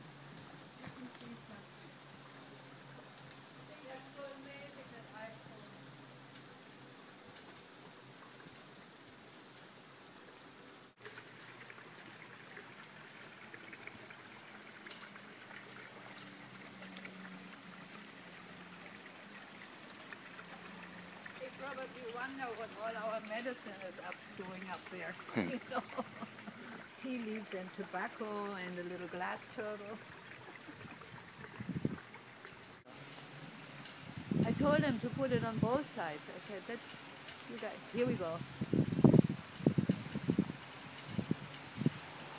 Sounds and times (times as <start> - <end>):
Rustling leaves: 0.0 - 42.3
Speech: 3.7 - 5.8, 21.4 - 25.8, 27.0 - 30.0, 34.4 - 38.4.